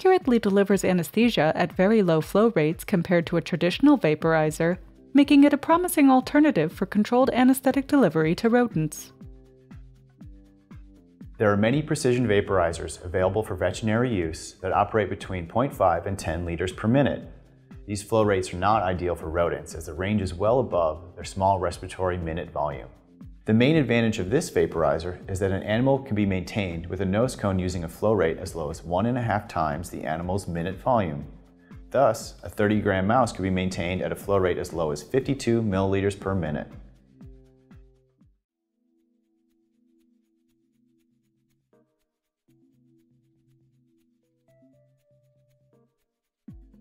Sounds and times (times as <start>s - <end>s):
Speech: 0.0s - 9.1s, 11.4s - 17.3s, 17.9s - 31.3s, 31.9s - 36.8s
Music: 0.0s - 46.8s.